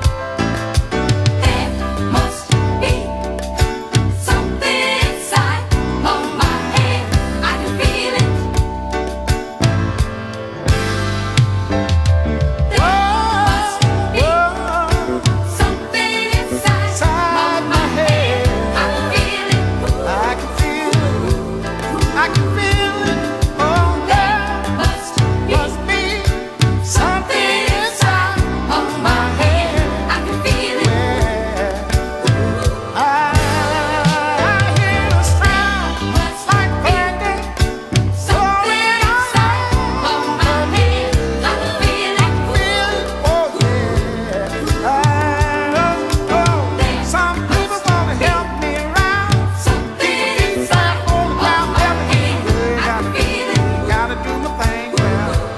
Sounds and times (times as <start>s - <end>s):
Soul music: 0.0s - 55.5s.